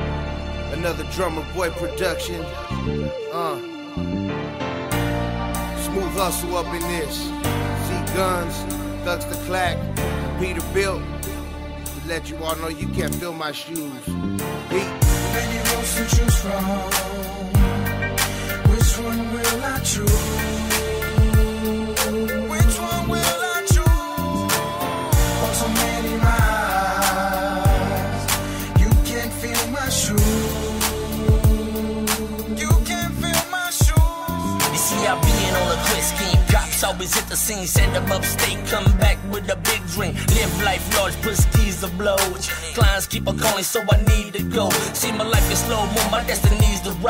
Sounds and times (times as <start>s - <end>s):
Music: 0.0s - 47.1s.